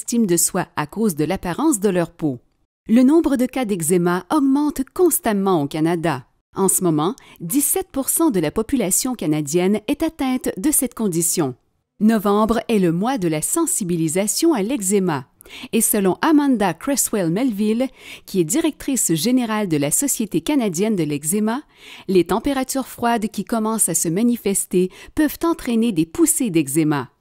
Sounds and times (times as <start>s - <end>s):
Speech: 0.0s - 27.1s.